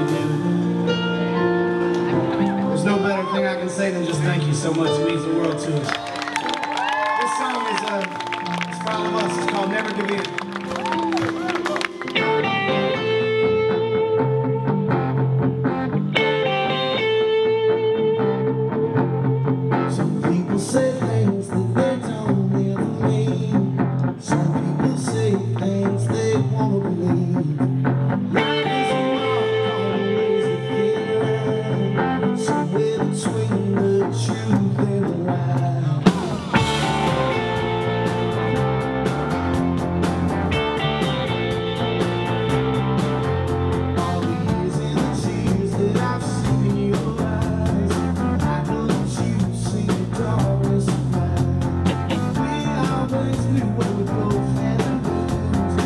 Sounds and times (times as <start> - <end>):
Music: 0.0 - 55.8
Speech: 2.5 - 5.9, 7.2 - 10.4.